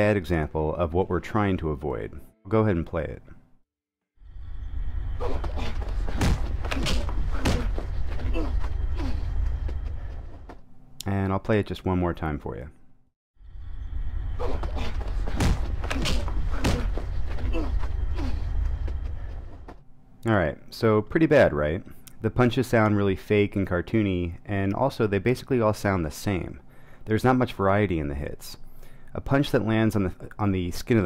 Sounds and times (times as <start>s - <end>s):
Speech: 0.0s - 3.4s, 11.0s - 12.8s, 20.2s - 28.6s, 29.2s - 31.0s.